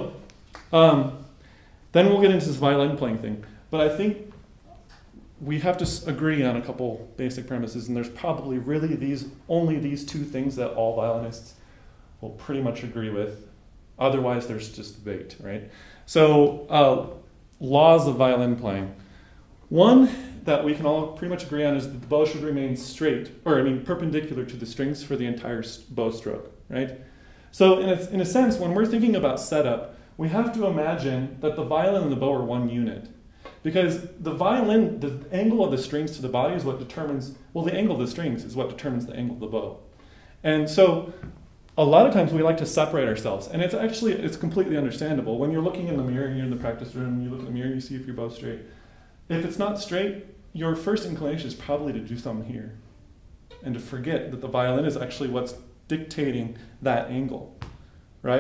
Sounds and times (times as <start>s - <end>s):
Speech: 0.0s - 1.3s, 1.9s - 4.3s, 5.4s - 11.6s, 12.2s - 19.0s, 19.7s - 41.2s, 41.8s - 48.7s, 49.3s - 52.8s, 53.6s - 57.6s.